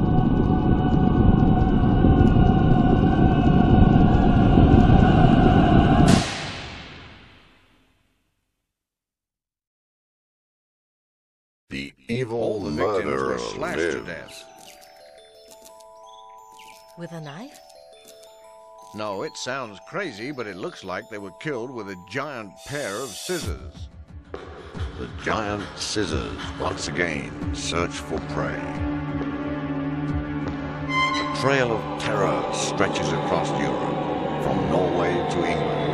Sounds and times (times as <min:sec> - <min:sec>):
Speech: 0:11.7 - 0:14.5, 0:19.0 - 0:23.9, 0:25.0 - 0:28.8, 0:31.4 - 0:35.7.